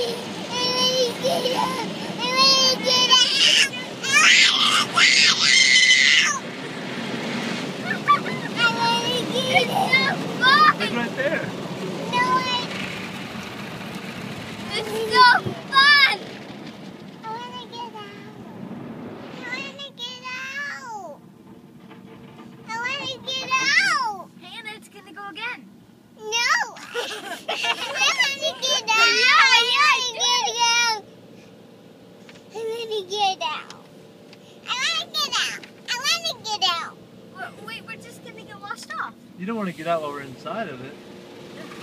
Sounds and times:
Child speech, kid speaking: 0.0 - 6.4, 7.8 - 11.4, 12.0 - 12.8, 14.7 - 16.3, 17.2 - 18.6, 19.4 - 21.2, 22.7 - 31.1, 32.6 - 33.9, 34.6 - 39.2.

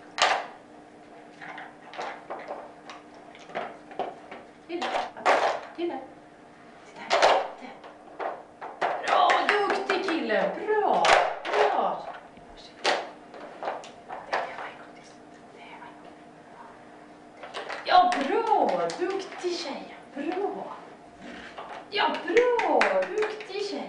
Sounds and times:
Speech: 4.7 - 6.1, 17.9 - 20.8, 21.9 - 23.8.

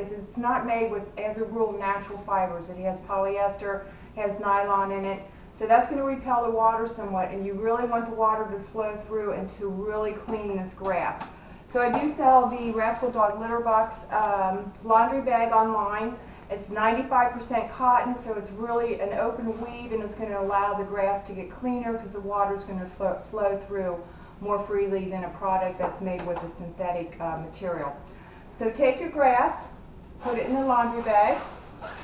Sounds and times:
Speech: 0.0 - 28.0, 28.6 - 31.5.

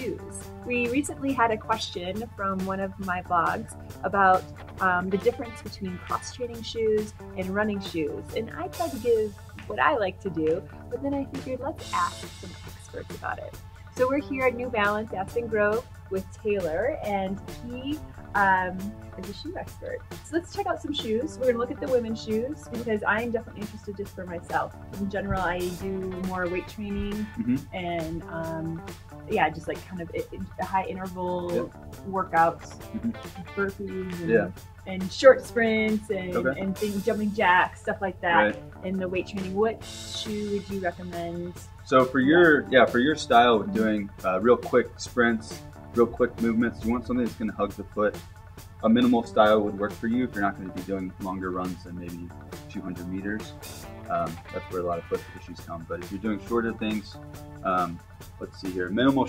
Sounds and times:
Speech: 0.0 - 48.2, 48.8 - 53.5, 54.1 - 59.2
Music: 0.0 - 59.2.

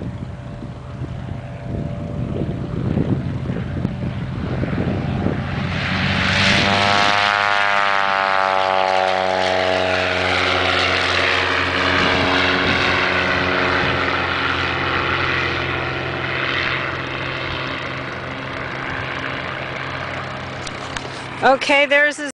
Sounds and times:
Speech: 21.4 - 22.3.

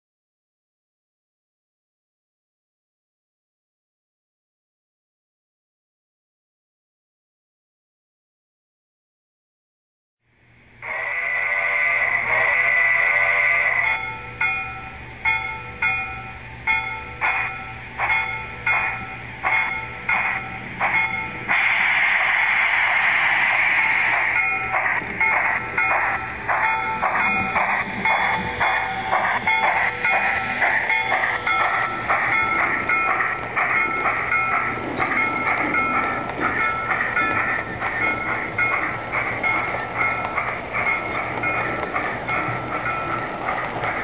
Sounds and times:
Outside, urban or manmade: 10.2 - 44.0
Train: 10.2 - 44.0
Railroad car, train wagon: 10.3 - 44.0.

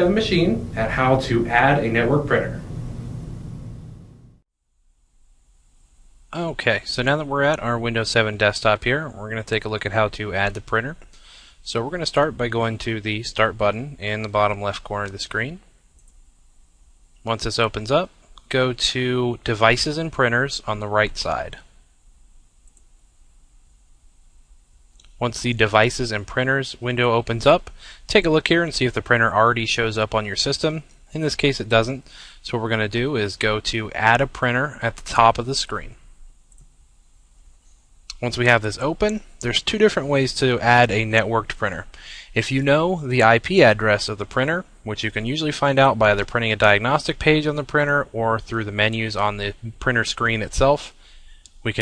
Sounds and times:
Speech: 0.0 - 2.6, 6.3 - 11.0, 11.6 - 15.6, 17.3 - 21.7, 25.2 - 36.0, 38.1 - 51.0.

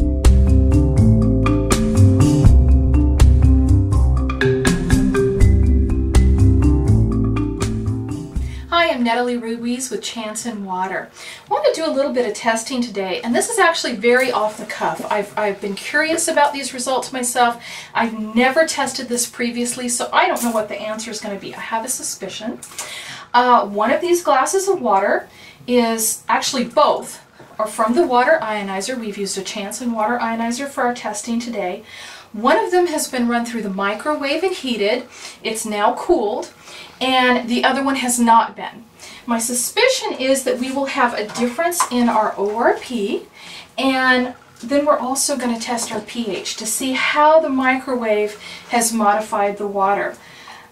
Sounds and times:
Speech: 8.7 - 22.6, 23.4 - 31.8, 32.4 - 50.2.

